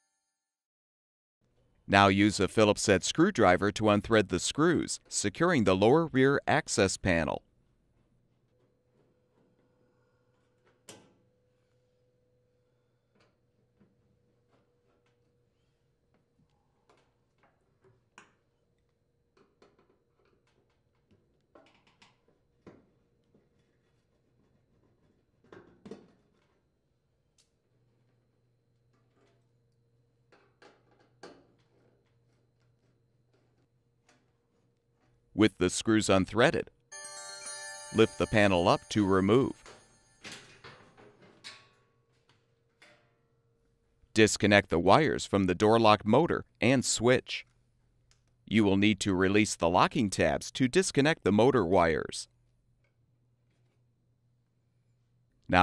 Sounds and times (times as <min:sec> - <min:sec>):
Speech: 0:01.9 - 0:07.4, 0:35.4 - 0:36.7, 0:37.9 - 0:39.6, 0:44.2 - 0:47.4, 0:48.5 - 0:52.3.